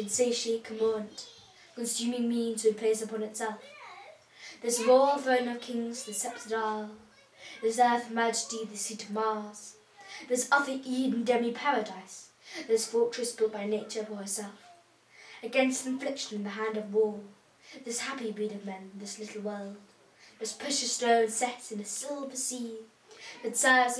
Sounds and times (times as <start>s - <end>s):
Narration, monologue: 0.0s - 23.9s.